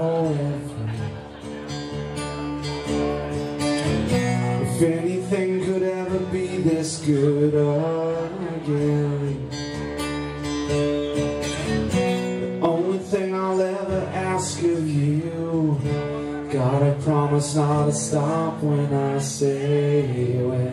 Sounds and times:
Music: 0.0s - 20.7s.

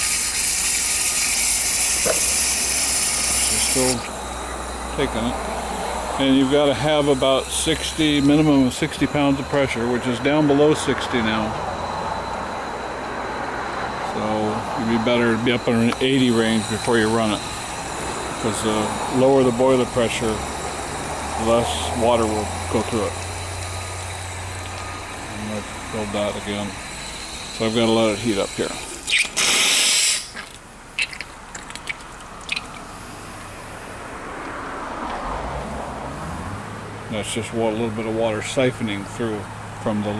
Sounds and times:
Steam: 0.0s - 11.7s, 14.1s - 30.4s
Speech: 3.4s - 4.1s, 4.9s - 5.4s, 6.2s - 11.6s, 14.1s - 17.4s, 18.4s - 20.5s, 21.4s - 23.2s, 25.3s - 26.8s, 27.6s - 28.8s, 37.1s - 40.1s.

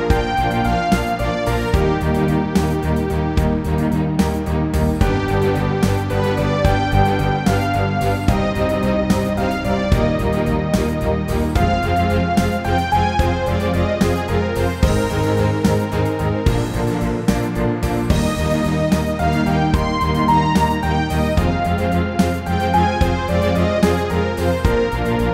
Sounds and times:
Background music: 0.0s - 25.3s.

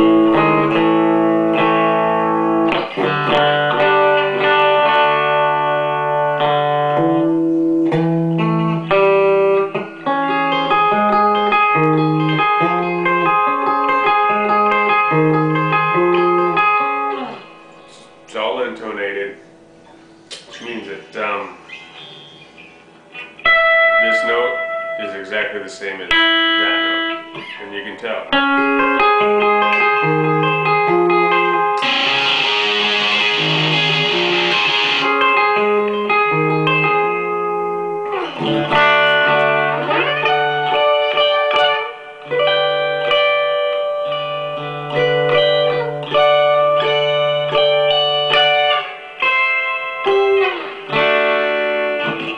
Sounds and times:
Electric guitar: 0.0s - 52.3s
Speech: 18.3s - 19.4s, 20.5s - 21.6s, 24.0s - 27.0s, 27.6s - 28.4s.

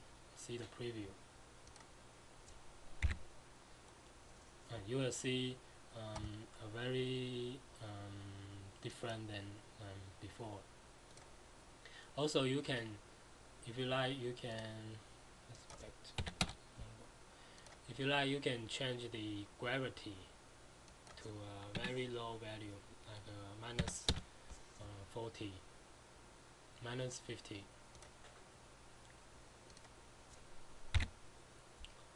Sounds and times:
Speech: 0.4s - 1.2s, 4.7s - 10.7s, 12.2s - 13.0s, 13.6s - 16.2s, 16.8s - 17.1s, 17.9s - 20.4s, 21.2s - 24.2s, 24.8s - 25.7s, 26.8s - 27.8s
Computer keyboard: 15.6s - 16.6s, 30.9s - 31.1s.

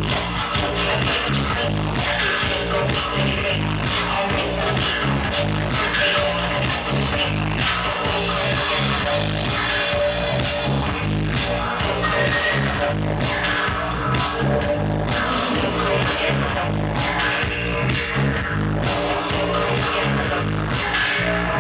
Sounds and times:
Dance music: 0.0s - 21.6s
Didgeridoo: 0.0s - 21.6s
Electronic dance music: 0.0s - 21.6s
Electronica: 0.0s - 21.6s
Singing: 0.0s - 21.6s
Techno: 0.0s - 21.6s
Trance music: 0.0s - 21.6s
Dubstep: 0.1s - 21.6s.

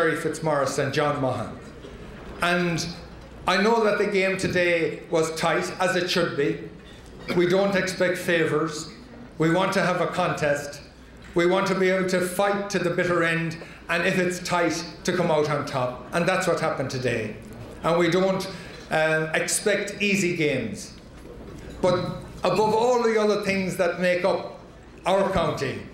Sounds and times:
Male speech, man speaking: 0.0s - 1.6s, 2.4s - 6.7s, 7.3s - 21.0s, 21.8s - 25.9s.

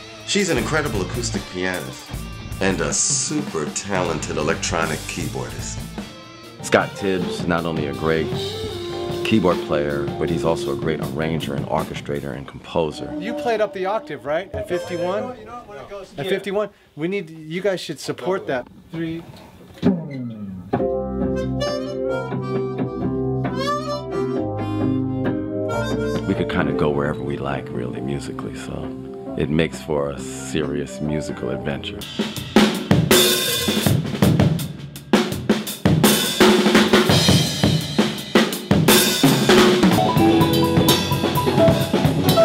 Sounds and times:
Bass drum: 0.0s - 6.0s, 7.0s - 12.2s, 35.4s - 42.4s
Drum kit: 0.0s - 12.6s, 19.8s - 29.0s, 32.0s - 42.4s.

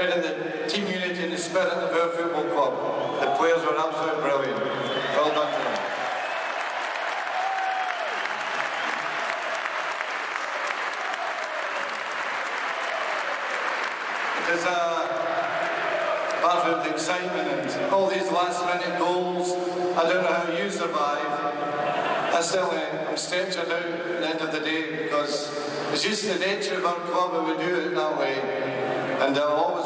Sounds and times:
Male speech, man speaking: 0.0s - 5.8s, 14.4s - 15.2s, 16.4s - 21.4s, 22.3s - 28.5s, 29.2s - 29.8s
Narration, monologue: 0.0s - 5.8s, 14.4s - 15.3s, 16.4s - 29.8s.

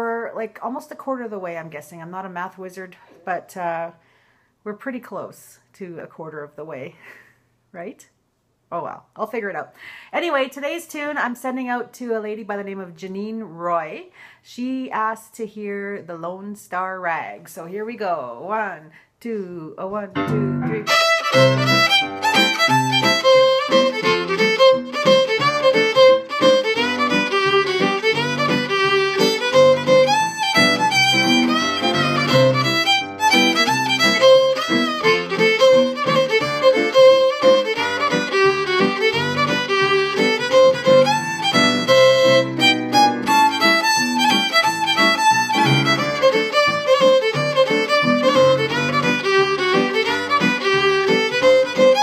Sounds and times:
Speech: 0.0s - 4.0s, 4.7s - 7.0s, 7.7s - 8.1s, 8.7s - 20.9s
Violin, fiddle: 20.8s - 52.0s.

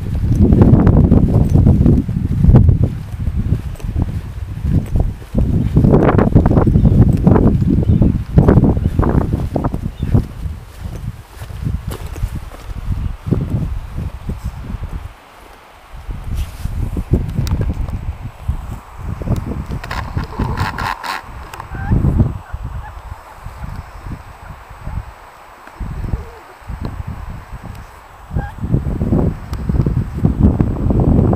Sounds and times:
Walk, footsteps: 1.5s - 6.0s, 7.2s - 12.8s, 13.4s - 18.0s.

